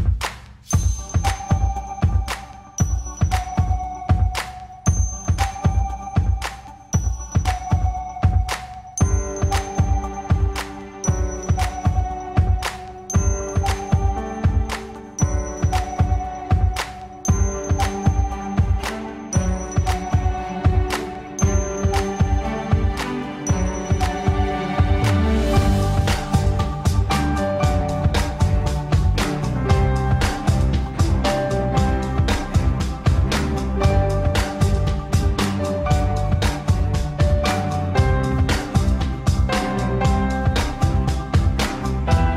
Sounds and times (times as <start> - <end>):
Music: 0.0 - 42.3.